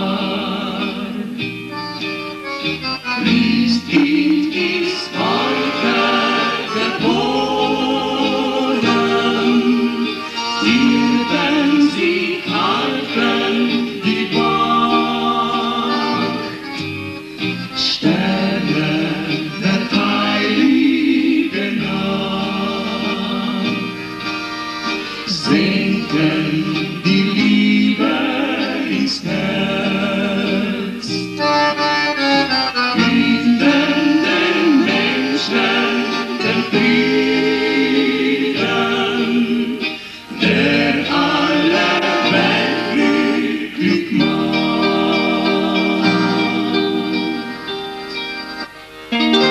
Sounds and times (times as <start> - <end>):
Music: 0.0 - 49.5.